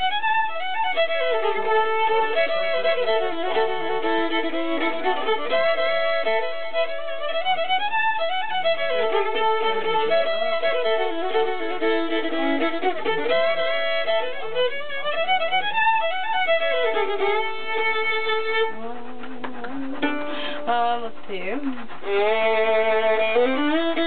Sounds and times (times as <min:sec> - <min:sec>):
Violin, fiddle: 0:00.0 - 0:24.0.